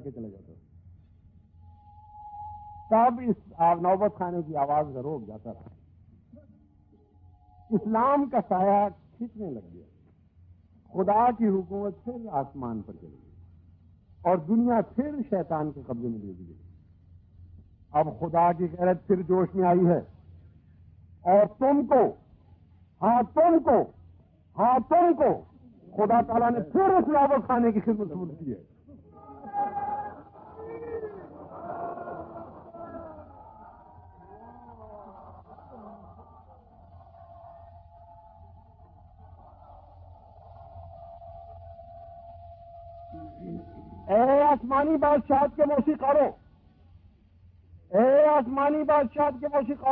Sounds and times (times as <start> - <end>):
Male speech, man speaking: 0.0 - 0.6, 2.9 - 5.7, 7.7 - 9.9, 10.9 - 13.2, 14.3 - 16.6, 17.9 - 20.1, 21.2 - 22.2, 23.0 - 23.9, 24.6 - 28.7, 43.2 - 46.4, 47.9 - 49.9.